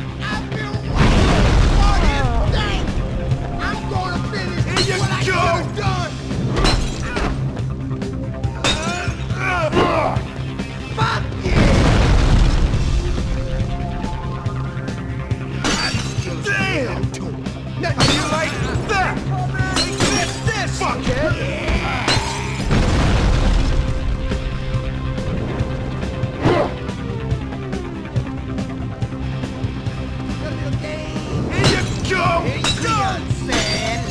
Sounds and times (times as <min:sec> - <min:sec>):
Music: 0:00.0 - 0:34.1.